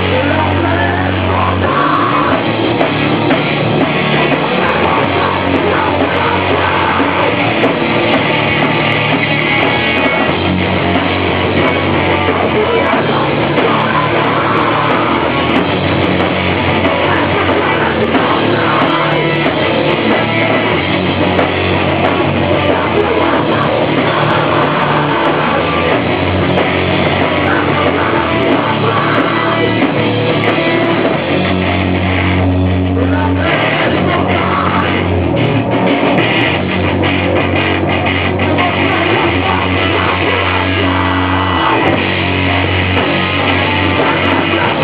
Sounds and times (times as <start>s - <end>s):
Rock music: 0.0s - 44.8s.